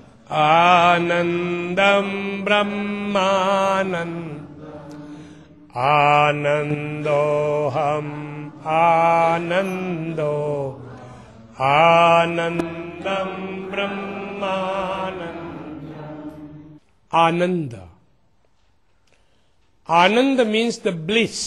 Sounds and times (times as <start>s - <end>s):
Mantra: 0.0s - 17.3s
Speech: 17.1s - 18.0s, 19.9s - 21.4s.